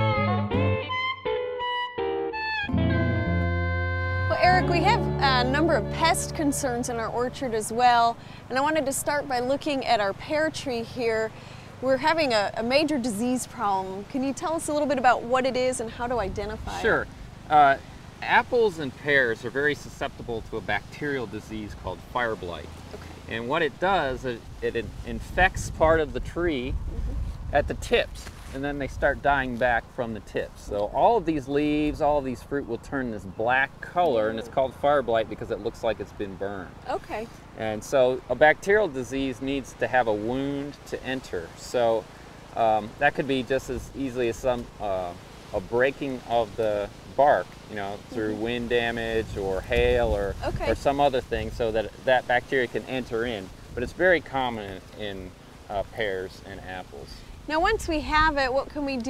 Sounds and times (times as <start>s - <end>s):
Speech: 4.3s - 22.7s, 23.3s - 42.0s, 42.6s - 59.1s.